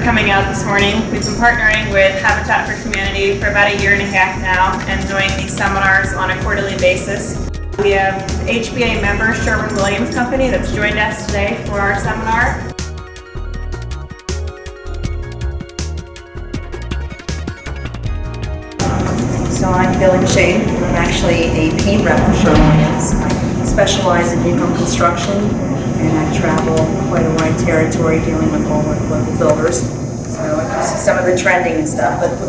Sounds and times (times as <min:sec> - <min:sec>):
Speech: 0:00.0 - 0:12.7, 0:18.9 - 0:32.4.